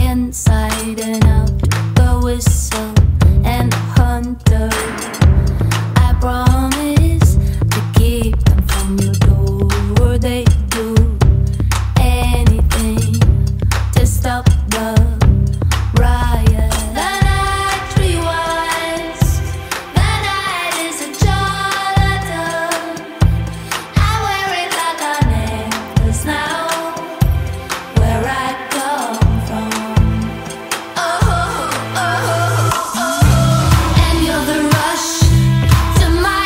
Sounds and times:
Music: 0:00.0 - 0:36.4.

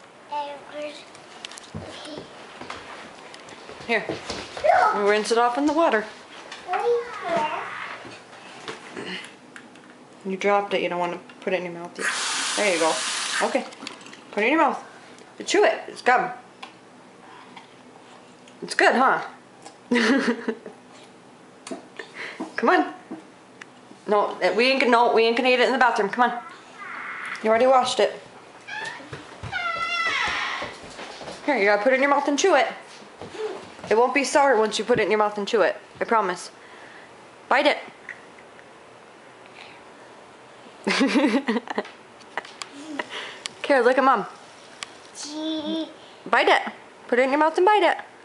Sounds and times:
Inside, small room: 0:00.0 - 0:48.2.

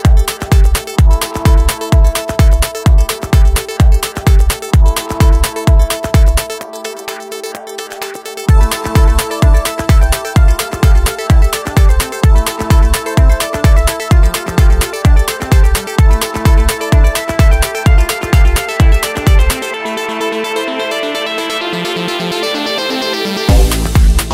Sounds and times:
Music: 0:00.0 - 0:24.3.

